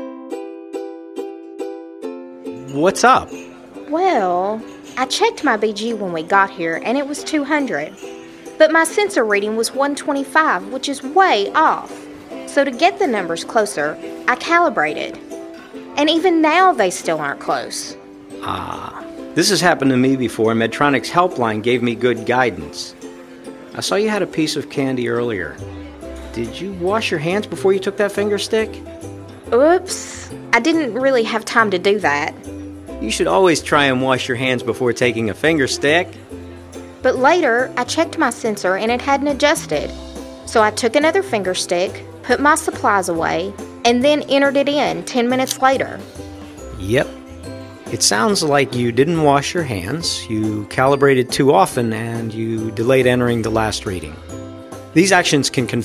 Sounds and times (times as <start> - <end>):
Music: 0.0 - 55.8.